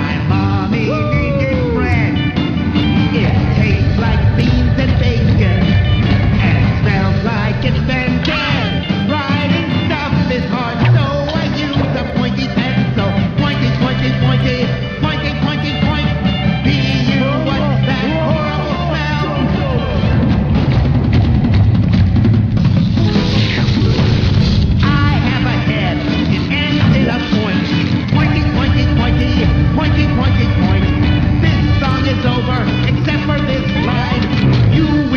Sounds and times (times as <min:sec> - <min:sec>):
Rock and roll: 0:00.0 - 0:35.1.